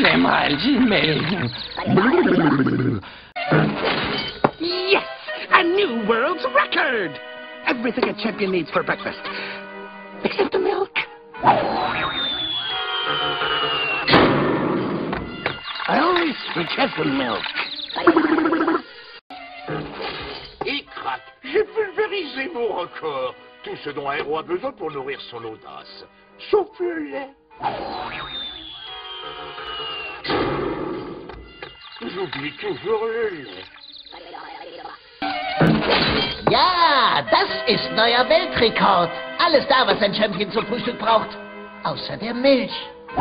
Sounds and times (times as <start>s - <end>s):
Music: 0.0s - 2.0s, 3.3s - 18.0s, 18.9s - 43.2s.